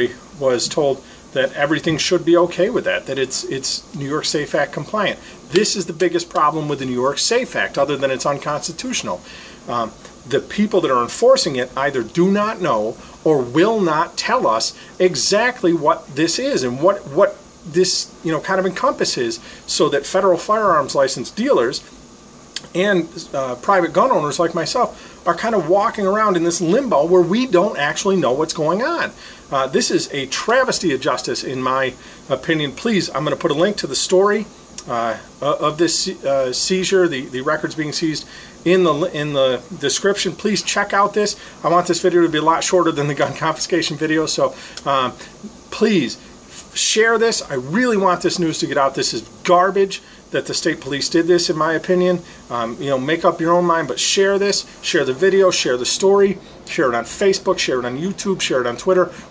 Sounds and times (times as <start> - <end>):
Speech: 0.0 - 21.9, 22.6 - 59.3.